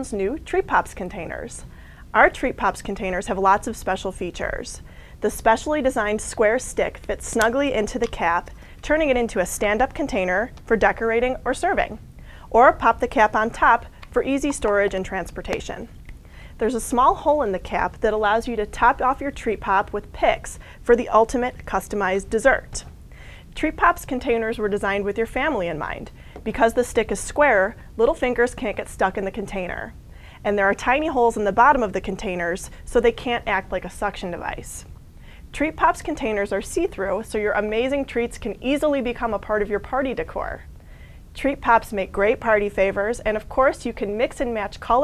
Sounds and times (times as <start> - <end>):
Speech: 0.0 - 15.9, 16.6 - 22.9, 23.6 - 34.9, 35.5 - 40.6, 41.4 - 45.0.